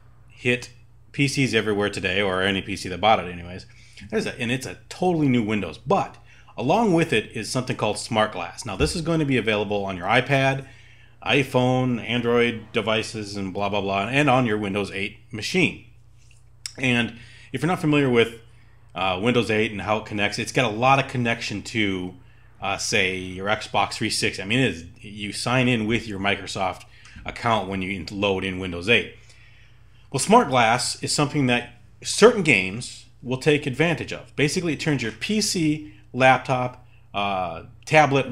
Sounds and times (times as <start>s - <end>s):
Speech: 0.4s - 15.9s, 16.7s - 29.2s, 30.1s - 38.3s.